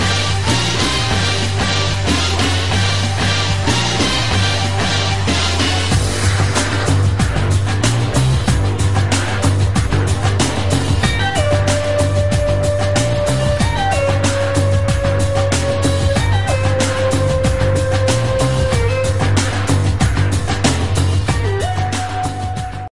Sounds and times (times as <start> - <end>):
Music: 0.0 - 22.9.